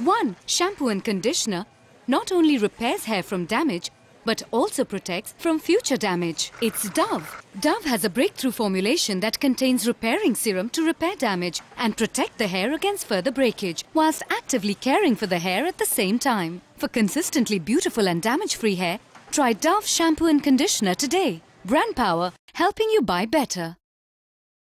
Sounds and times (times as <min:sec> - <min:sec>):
Speech: 0:00.0 - 0:23.8.